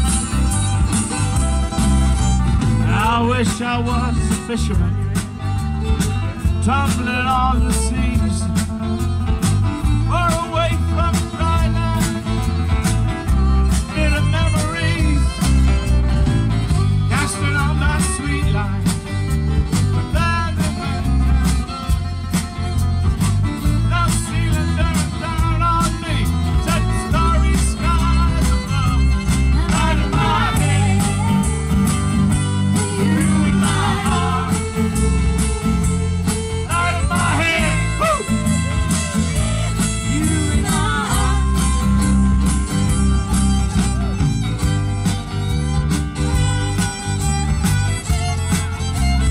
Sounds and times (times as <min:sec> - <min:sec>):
Violin, fiddle: 0:00.0 - 0:06.5, 0:07.3 - 0:49.3
Blues: 0:00.0 - 0:49.3.